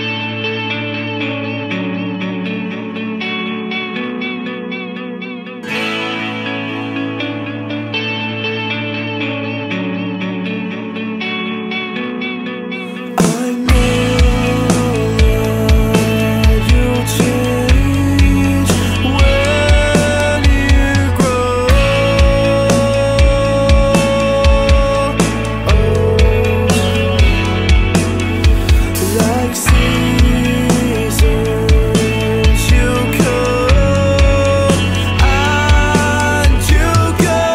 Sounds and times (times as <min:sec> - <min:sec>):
Music: 0:00.0 - 0:37.5.